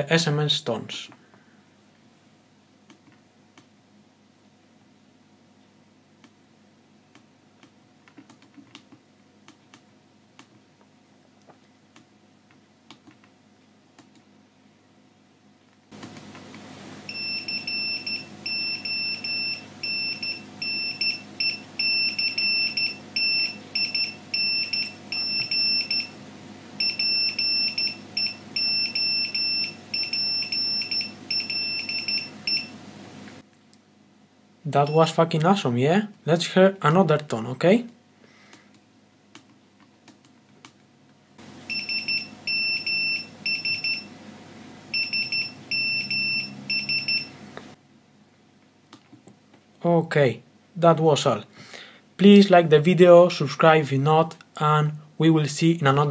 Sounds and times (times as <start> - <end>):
Buzzer: 17.1 - 26.1, 26.8 - 32.7, 41.7 - 44.1, 45.0 - 47.3.